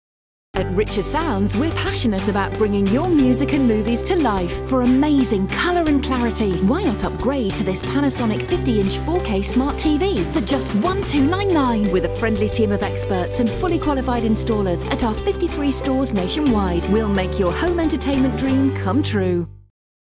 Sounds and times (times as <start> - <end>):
Speech: 0.6 - 19.5
Music: 0.6 - 19.8.